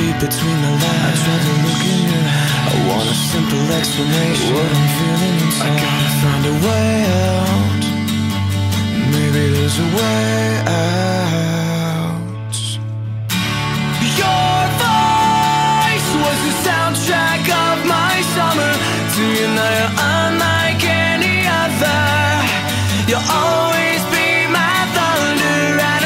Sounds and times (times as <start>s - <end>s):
Music: 0.0s - 26.0s.